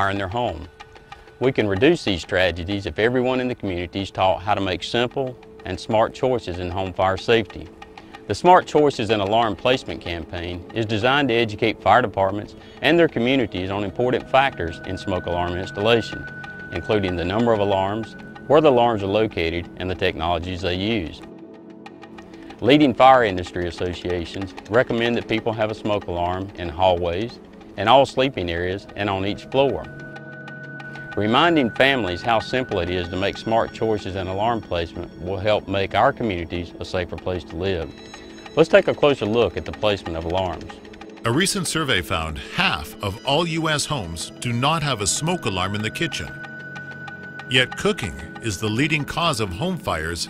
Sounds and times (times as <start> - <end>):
Speech: 0.0 - 0.7, 1.4 - 7.7, 8.3 - 21.2, 22.6 - 29.9, 31.2 - 37.9, 38.6 - 46.4, 47.5 - 50.2
Music: 0.0 - 50.2.